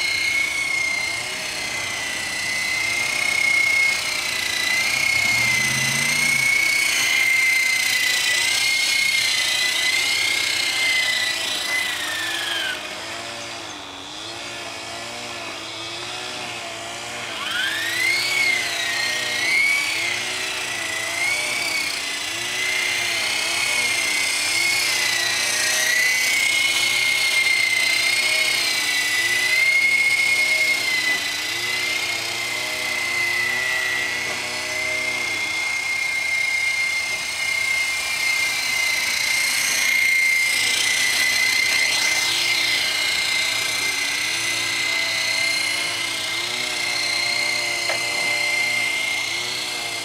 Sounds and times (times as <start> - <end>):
Helicopter: 0.0 - 50.0.